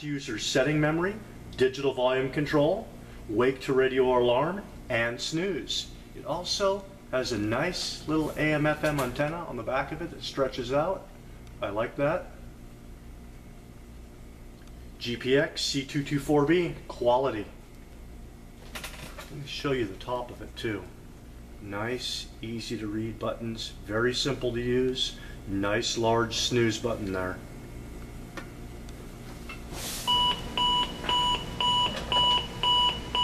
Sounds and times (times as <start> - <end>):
Speech: 0.0 - 12.4, 15.0 - 17.6, 19.3 - 21.0, 21.6 - 27.5.